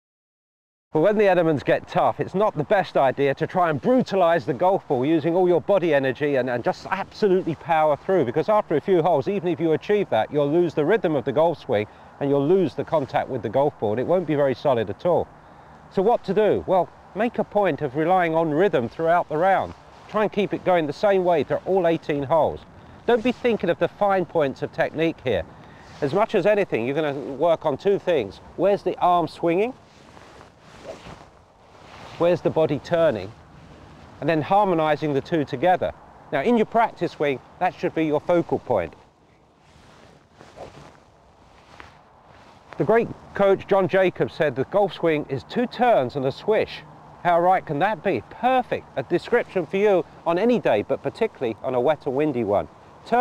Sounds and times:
Speech: 1.0 - 15.3, 15.9 - 29.8, 32.2 - 33.3, 34.2 - 39.0, 42.8 - 53.2.

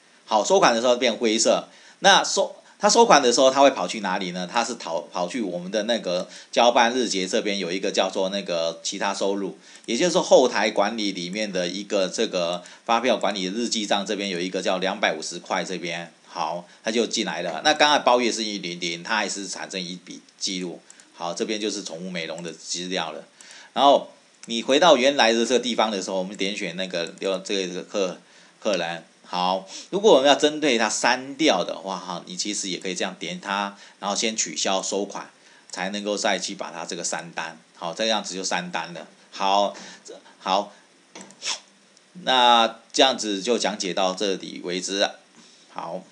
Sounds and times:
Speech: 0.3 - 40.8, 42.2 - 45.2, 45.8 - 46.1.

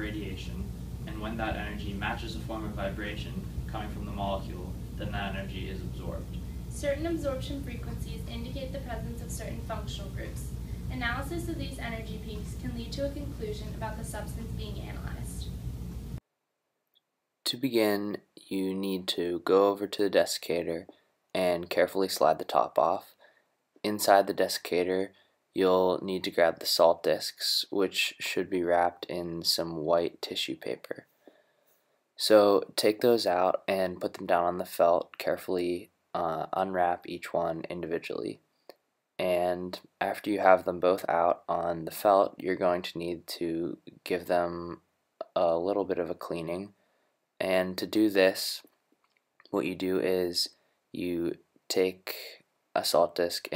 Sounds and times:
Speech: 0.0 - 15.5, 17.5 - 23.1, 23.9 - 31.0, 32.2 - 38.4, 39.2 - 46.7, 47.4 - 48.7, 49.6 - 53.5.

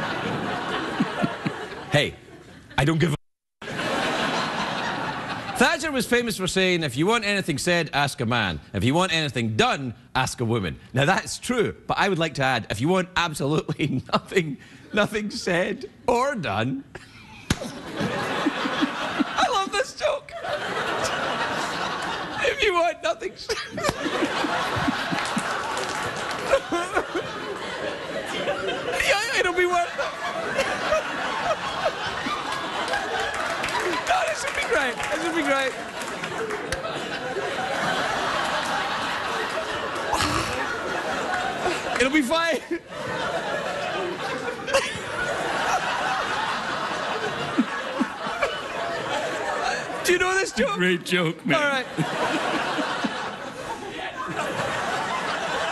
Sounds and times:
Speech: 2.8 - 3.2, 5.6 - 16.9, 19.4 - 20.3, 22.4 - 23.5, 29.0 - 30.0, 34.1 - 35.8, 42.0 - 42.7, 50.0 - 51.9.

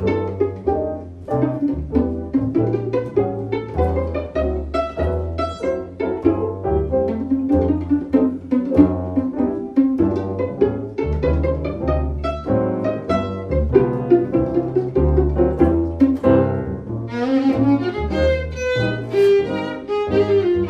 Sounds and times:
Double bass: 0.0 - 20.7
Piano: 0.0 - 20.7
Violin, fiddle: 0.0 - 20.7.

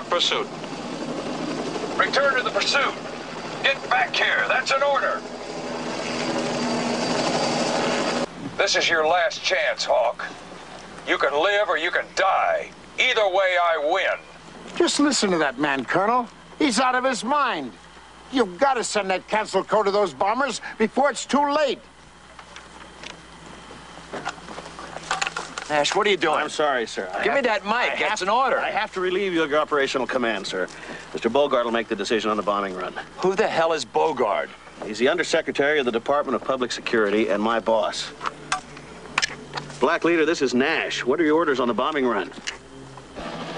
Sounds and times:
Speech: 0.0 - 0.5, 2.0 - 3.0, 3.6 - 5.2, 8.6 - 10.4, 11.1 - 14.2, 14.8 - 21.9, 25.7 - 38.2, 39.8 - 42.4
Outside, rural or natural: 0.0 - 43.5.

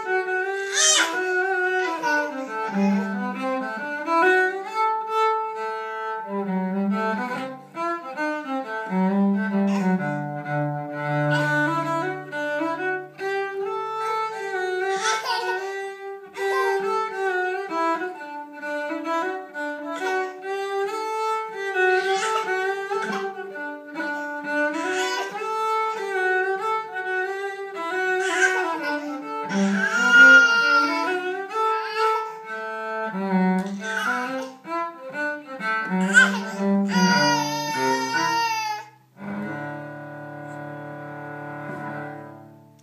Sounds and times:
Cello: 0.0 - 42.8.

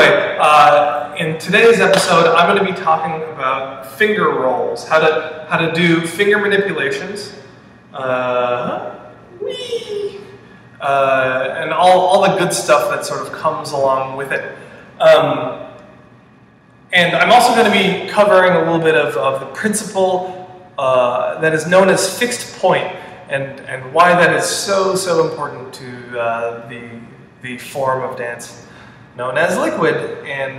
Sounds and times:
Speech: 0.0 - 7.4, 8.0 - 15.6, 16.9 - 30.5.

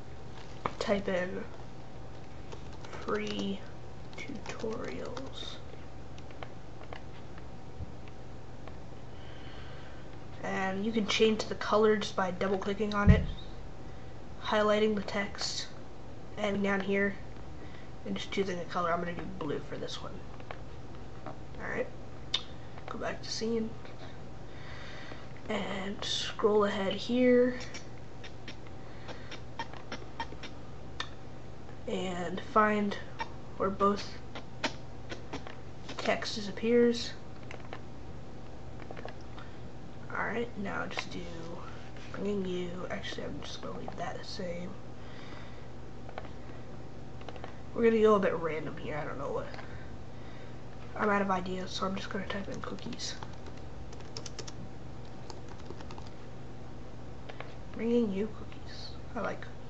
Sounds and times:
Speech: 0.8 - 1.6, 2.9 - 5.7, 10.4 - 13.6, 14.4 - 15.8, 16.4 - 17.2, 18.0 - 20.3, 21.6 - 22.0, 22.9 - 24.1, 25.5 - 27.9, 31.8 - 34.2, 36.0 - 37.2, 40.1 - 44.8, 47.8 - 49.8, 51.0 - 53.3, 57.8 - 59.6.

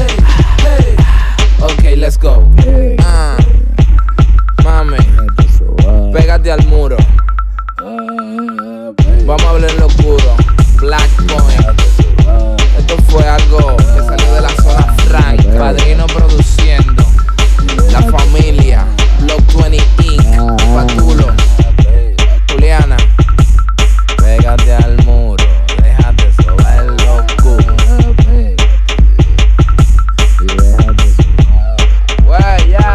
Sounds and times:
Music: 0.0 - 32.9.

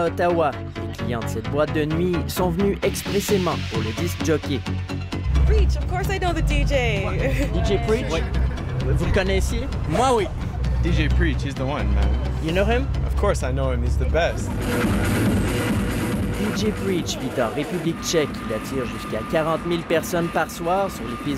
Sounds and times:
Speech: 0.0 - 4.6, 16.4 - 21.3
Music: 0.0 - 21.3.

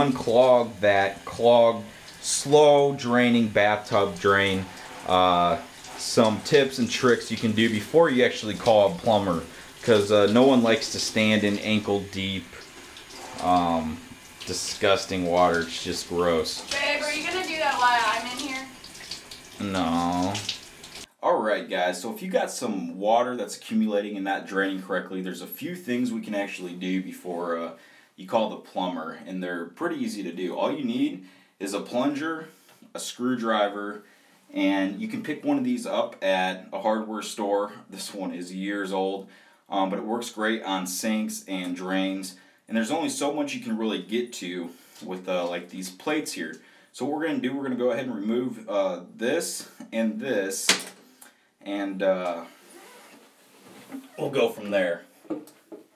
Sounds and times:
Speech: 0.0 - 12.6, 13.4 - 18.7, 19.6 - 20.5, 21.2 - 50.9, 51.6 - 52.5, 54.0 - 55.1.

